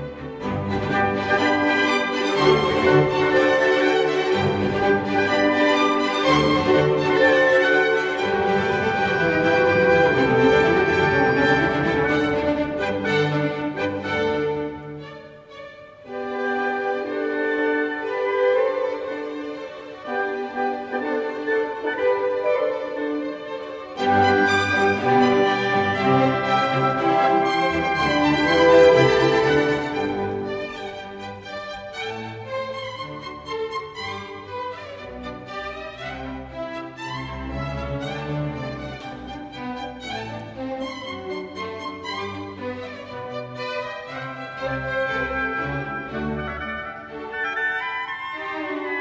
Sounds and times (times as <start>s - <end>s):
Violin, fiddle: 0.0s - 49.0s.